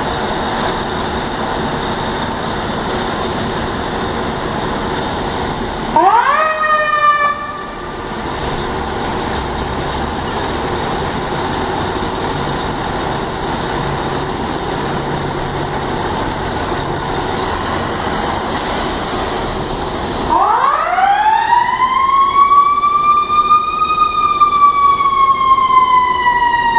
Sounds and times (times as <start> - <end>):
Fire engine, fire truck (siren): 0.0 - 26.7
Truck: 0.0 - 26.7.